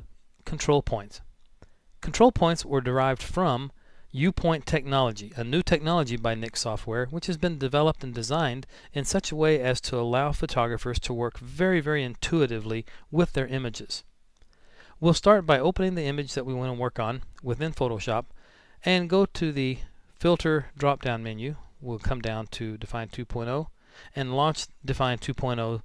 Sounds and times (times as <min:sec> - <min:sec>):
Speech: 0:00.0 - 0:01.3, 0:02.0 - 0:14.1, 0:15.0 - 0:25.8.